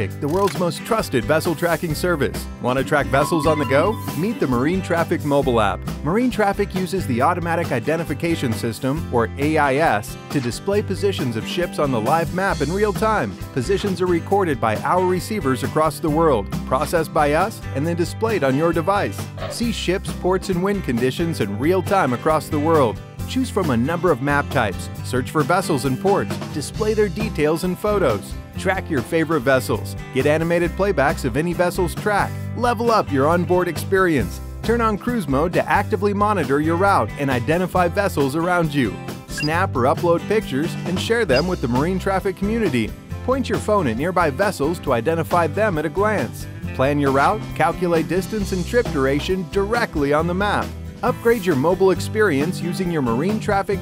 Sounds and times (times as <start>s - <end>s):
Music: 0.0s - 53.8s
Speech: 0.0s - 53.8s.